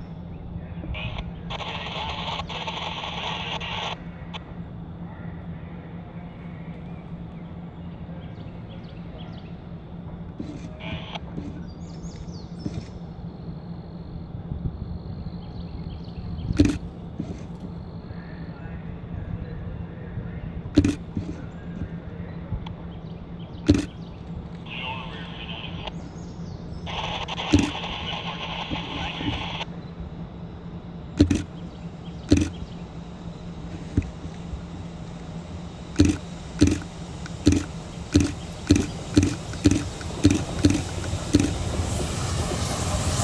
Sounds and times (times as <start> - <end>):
Speech: 18.2 - 20.6, 24.6 - 26.0, 26.9 - 29.6.